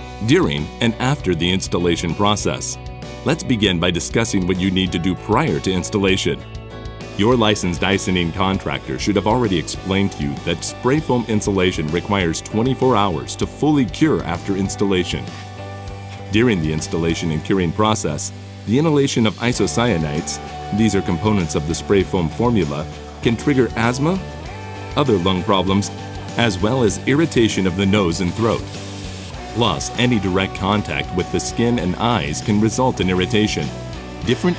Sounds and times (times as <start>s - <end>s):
Music: 0.0s - 34.5s
Speech: 0.2s - 6.4s, 7.2s - 15.4s, 16.2s - 24.3s, 25.0s - 28.7s, 29.4s - 34.5s.